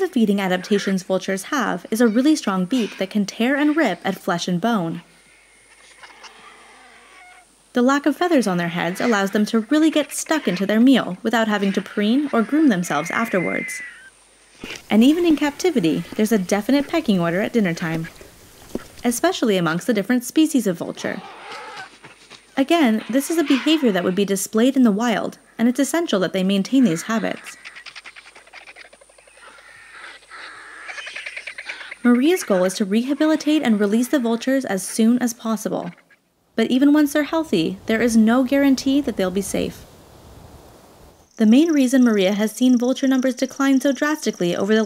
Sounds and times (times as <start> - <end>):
Speech: 0.0 - 5.0, 7.8 - 13.8, 14.9 - 18.1, 19.0 - 21.2, 22.6 - 27.6, 32.0 - 35.9, 36.6 - 39.8, 41.4 - 44.8
Outside, rural or natural: 0.0 - 44.8
Bird: 26.6 - 35.1.